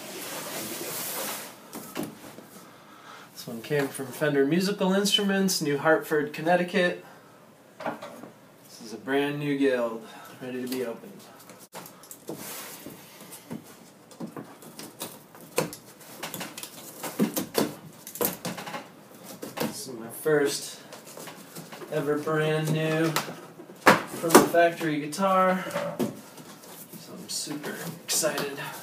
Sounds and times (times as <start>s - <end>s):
Speech: 3.4s - 7.0s, 8.7s - 11.3s, 19.7s - 20.9s, 21.9s - 23.3s, 24.2s - 25.7s, 27.0s - 28.8s.